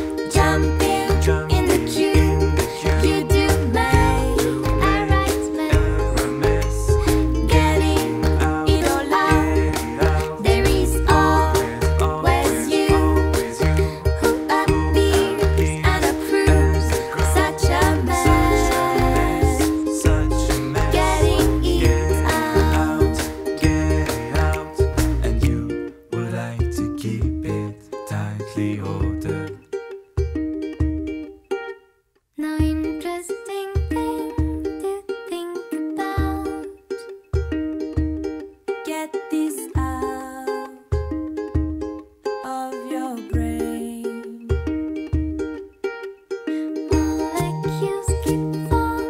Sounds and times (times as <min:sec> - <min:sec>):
Music: 0:00.0 - 0:49.1.